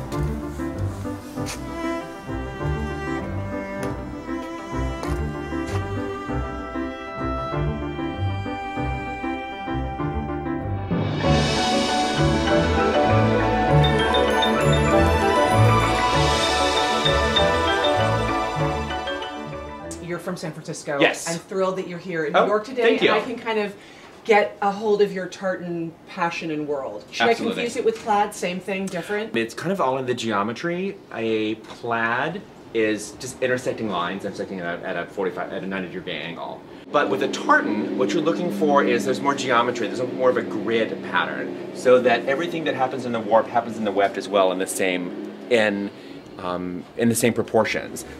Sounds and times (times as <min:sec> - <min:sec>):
Speech: 0:20.1 - 0:23.7, 0:24.3 - 0:48.1.